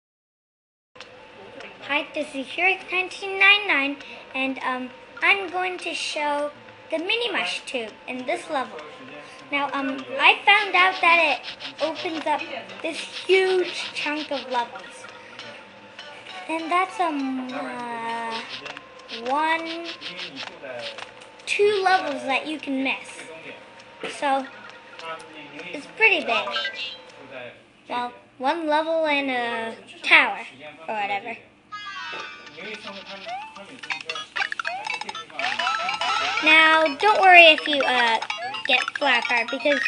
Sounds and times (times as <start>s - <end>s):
Child speech, kid speaking: 1.8s - 15.1s, 16.5s - 18.5s, 19.2s - 20.0s, 21.5s - 23.4s, 24.1s - 24.5s, 25.7s - 27.0s, 27.9s - 32.8s, 36.2s - 39.8s.